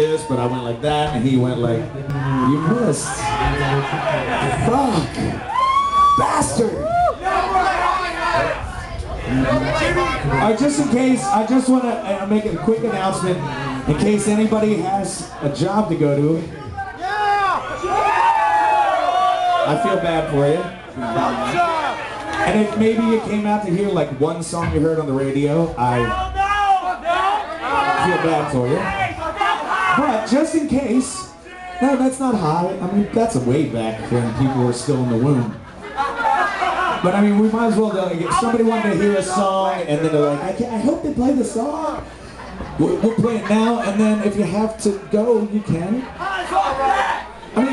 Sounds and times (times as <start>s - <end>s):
Speech: 0.0s - 5.4s, 9.2s - 17.0s, 19.7s - 26.4s, 27.7s - 35.6s, 37.0s - 42.0s, 42.8s - 46.9s.